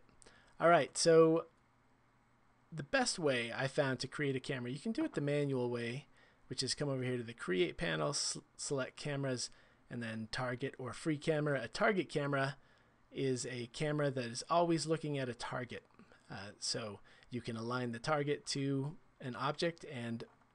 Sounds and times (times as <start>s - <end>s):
Speech: 0.6s - 1.5s, 2.8s - 12.6s, 13.2s - 20.3s.